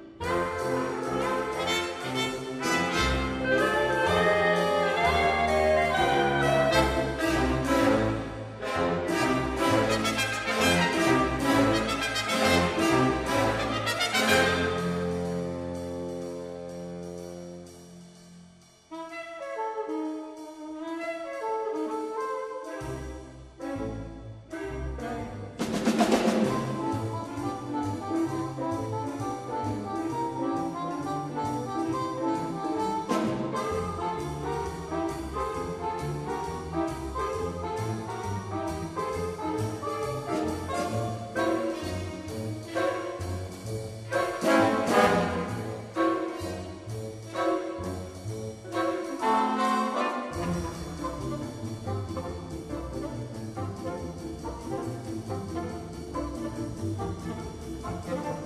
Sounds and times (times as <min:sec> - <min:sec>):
Music: 0:00.0 - 0:58.4.